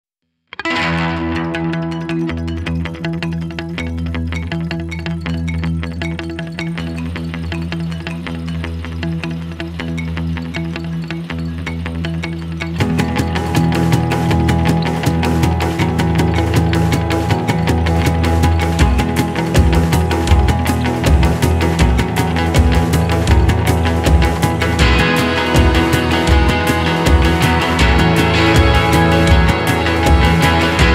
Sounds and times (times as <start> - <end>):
Electric guitar: 0.5 - 30.9.